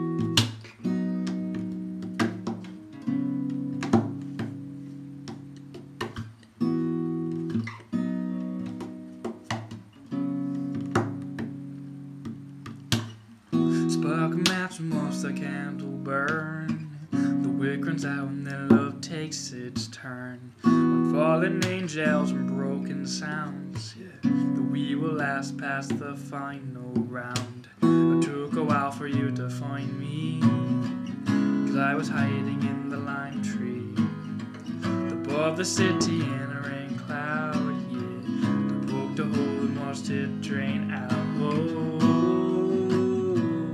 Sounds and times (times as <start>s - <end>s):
Guitar: 0.0s - 43.7s.